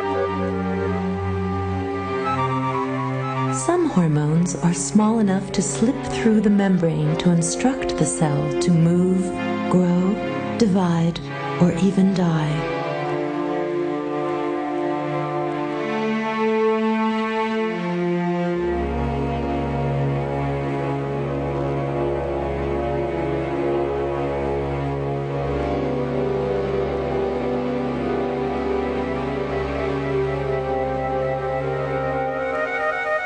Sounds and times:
Music: 0:00.0 - 0:33.2
Speech: 0:03.6 - 0:12.7.

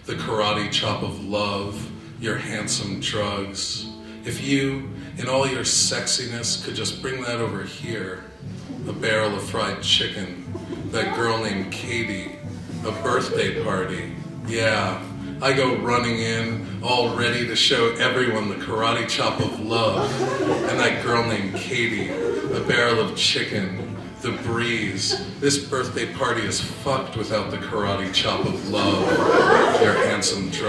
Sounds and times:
Music: 0:00.0 - 0:30.6
Speech: 0:00.0 - 0:30.6.

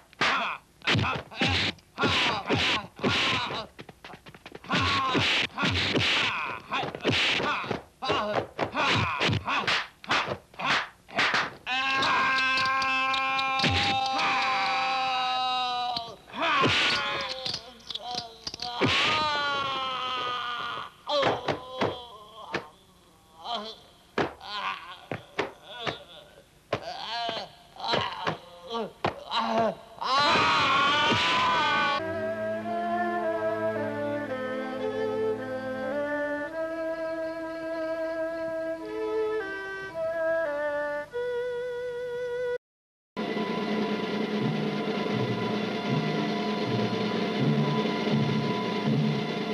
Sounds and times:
Speech: 0:00.3 - 0:03.7, 0:06.3 - 0:09.7, 0:21.1 - 0:30.2
Violin, fiddle: 0:32.0 - 0:37.9.

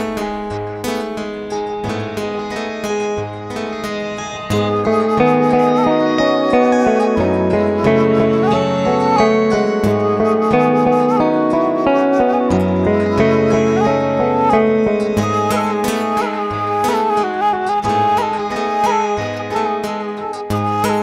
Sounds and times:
Wind instrument, woodwind instrument: 0:01.9 - 0:21.0.

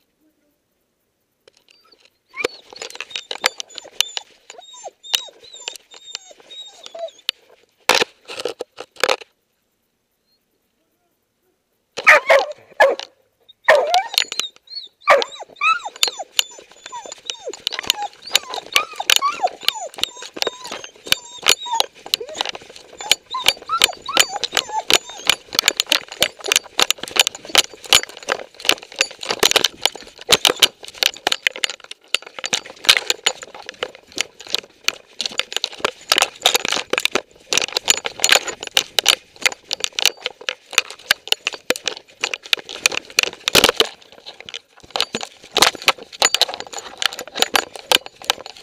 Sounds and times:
Dog: 0:01.7 - 0:07.3, 0:12.0 - 0:28.2.

